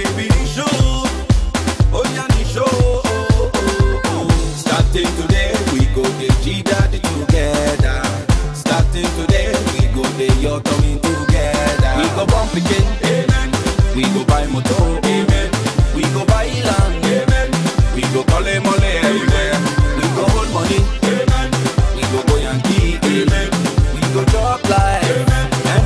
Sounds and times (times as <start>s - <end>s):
Afrobeat: 0.0s - 25.8s.